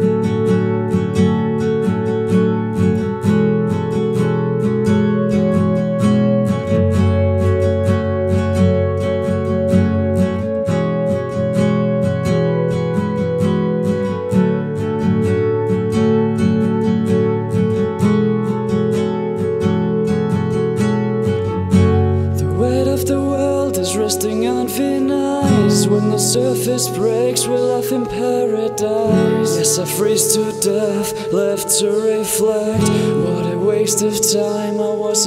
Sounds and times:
Music: 0.0s - 35.2s.

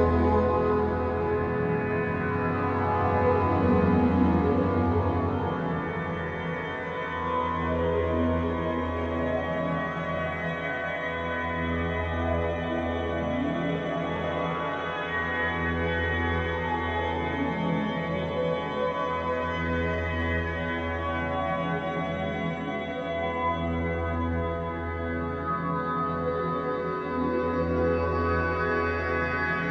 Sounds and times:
Music: 0.0s - 29.7s.

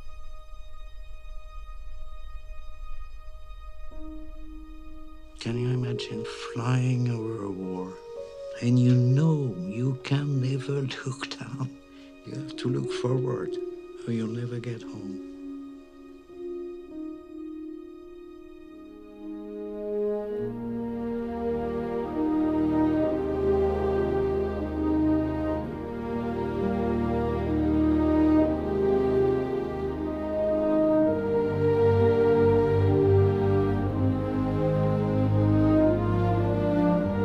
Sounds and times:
Music: 0.0s - 37.2s.

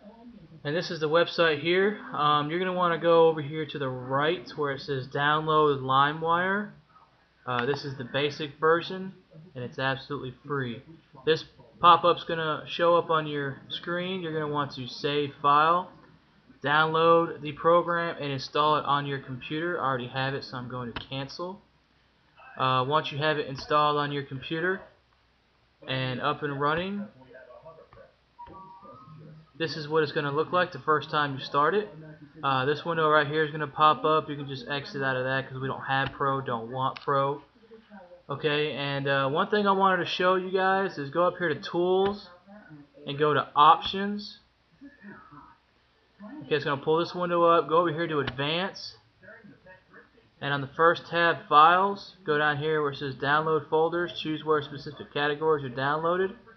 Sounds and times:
Speech: 0.0s - 6.8s, 7.5s - 21.7s, 22.4s - 25.0s, 25.8s - 45.6s, 46.2s - 56.5s.

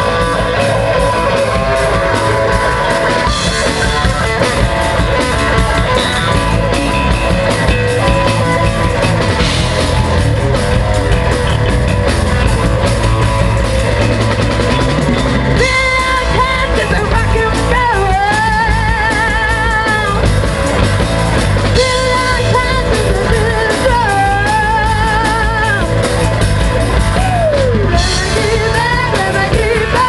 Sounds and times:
Drum: 0.0s - 30.0s
Drum kit: 0.0s - 30.0s
Rock and roll: 0.0s - 30.0s.

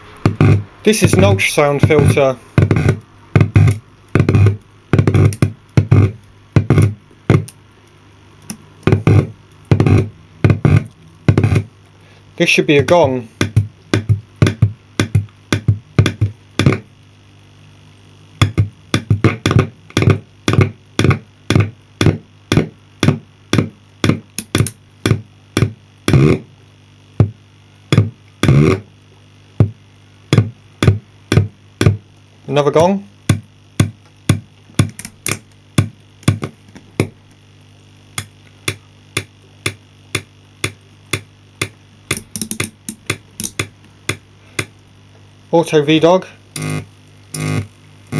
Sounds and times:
Drum machine: 0.0s - 7.6s, 8.5s - 11.8s, 12.8s - 16.9s, 18.4s - 26.5s, 27.1s - 28.9s, 29.5s - 32.1s, 32.7s - 37.2s, 38.1s - 44.9s, 46.6s - 48.1s
Speech: 0.8s - 2.5s, 12.4s - 13.4s, 32.5s - 33.1s, 45.5s - 46.4s.

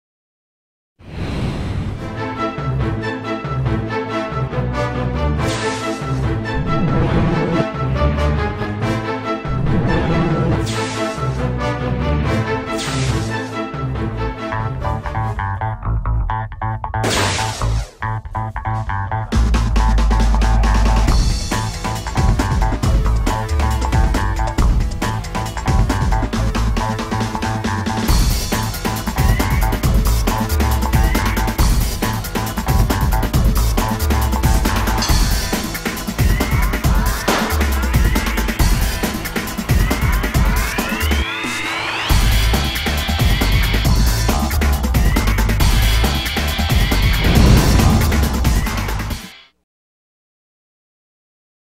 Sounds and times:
Music: 1.9s - 49.6s.

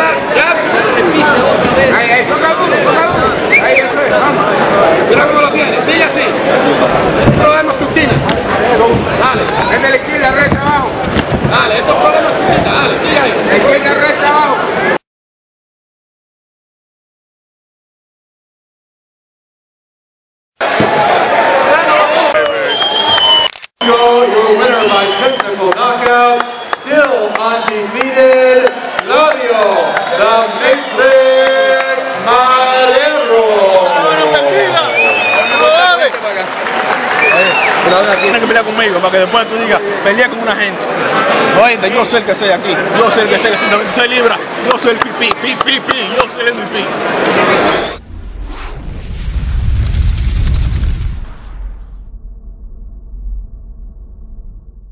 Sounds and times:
Speech: 0.0s - 15.0s, 23.8s - 36.5s, 37.3s - 40.9s, 41.5s - 47.6s.

